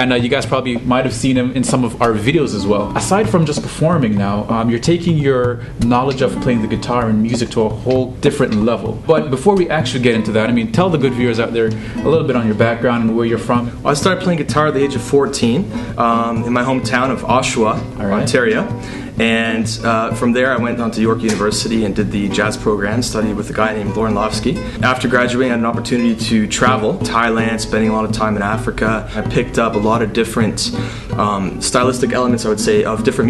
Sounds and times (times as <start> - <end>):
Music: 0.0 - 33.3
Speech: 0.0 - 33.3.